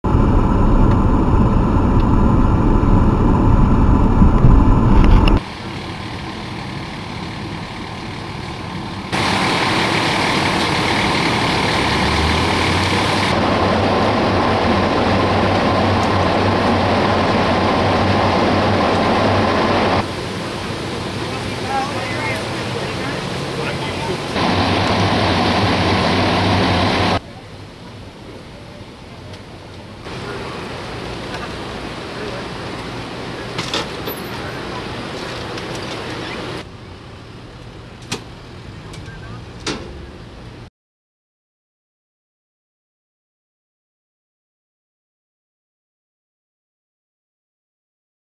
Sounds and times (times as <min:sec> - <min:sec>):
Outside, urban or manmade: 0:00.0 - 0:40.7
Vehicle: 0:00.0 - 0:40.7.